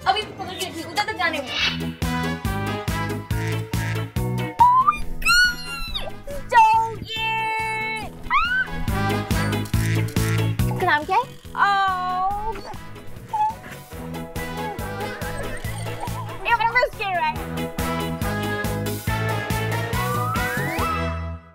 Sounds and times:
Music: 0:00.0 - 0:21.5.

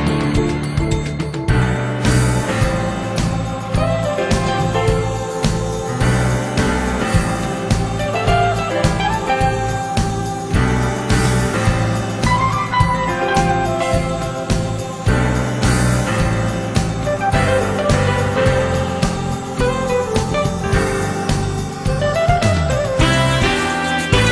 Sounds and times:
Music: 0:00.0 - 0:24.3.

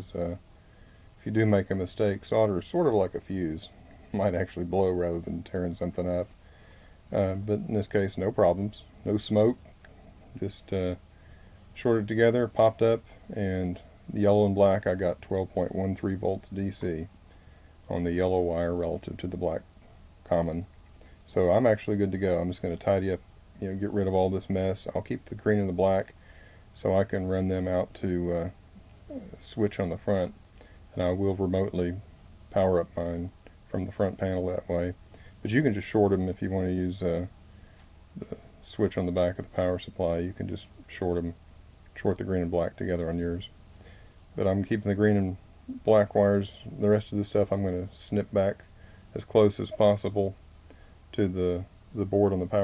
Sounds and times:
Speech: 0:00.0 - 0:00.4, 0:01.2 - 0:06.3, 0:07.1 - 0:09.7, 0:10.3 - 0:11.0, 0:11.8 - 0:17.1, 0:17.9 - 0:20.7, 0:21.3 - 0:26.2, 0:26.8 - 0:37.3, 0:38.2 - 0:41.4, 0:42.0 - 0:43.6, 0:44.4 - 0:50.4, 0:51.1 - 0:52.6.

